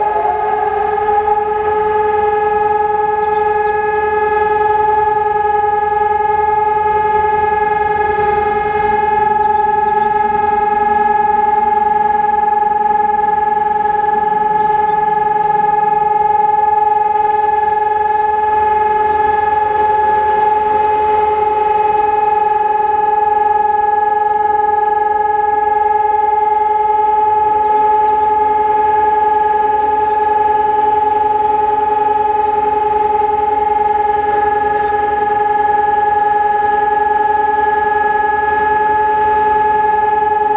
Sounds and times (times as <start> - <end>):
Civil defense siren: 0.0 - 40.5.